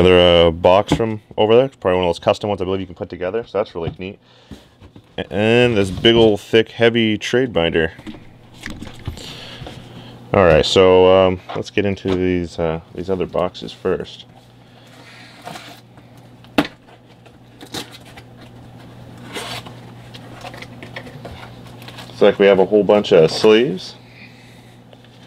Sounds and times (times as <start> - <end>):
Speech: 0.0 - 4.2, 5.2 - 8.0, 10.3 - 14.3, 22.2 - 24.0
Inside, small room: 0.0 - 25.2.